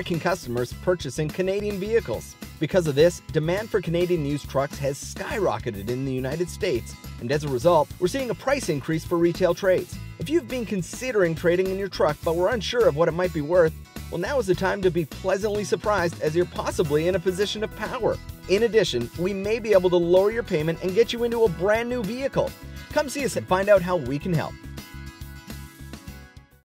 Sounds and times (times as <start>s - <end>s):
Speech: 0.0s - 24.6s
Music: 0.0s - 26.6s.